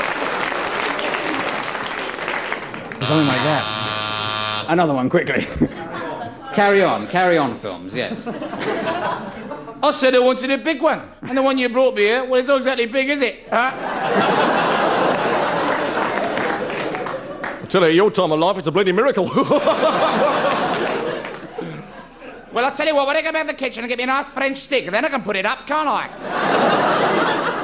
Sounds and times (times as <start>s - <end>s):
Speech: 4.7s - 8.4s, 9.8s - 13.8s, 17.7s - 19.3s, 22.5s - 26.1s.